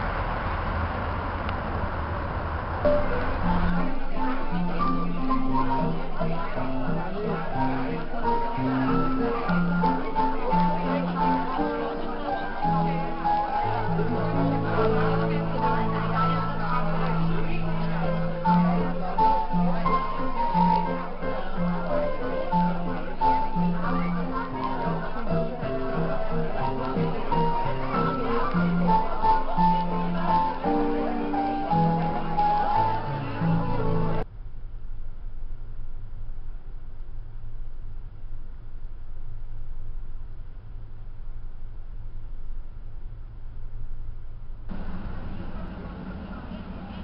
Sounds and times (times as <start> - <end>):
Speech: 2.9 - 34.2, 44.7 - 47.0
Music: 2.9 - 34.3.